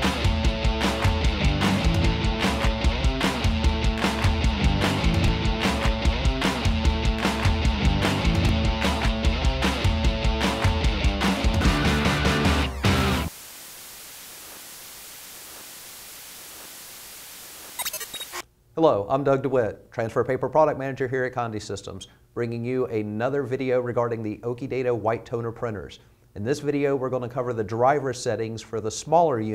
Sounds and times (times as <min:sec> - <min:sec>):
Speech: 0:18.8 - 0:29.5.